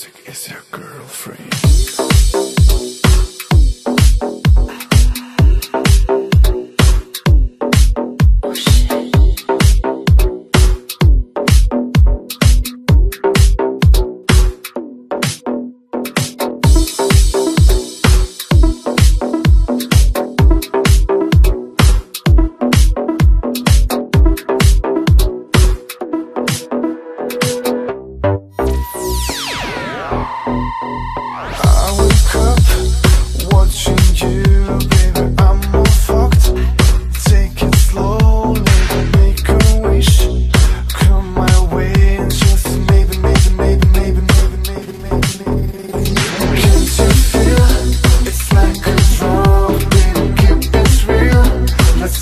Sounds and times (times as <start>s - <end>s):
Exciting music: 1.5s - 52.2s.